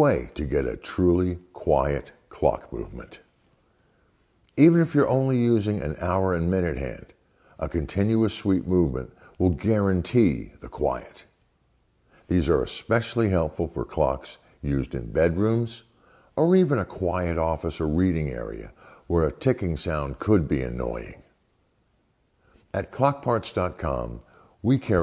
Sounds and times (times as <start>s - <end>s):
Speech: 0.0s - 3.3s, 4.5s - 11.4s, 12.3s - 21.4s, 22.7s - 25.0s.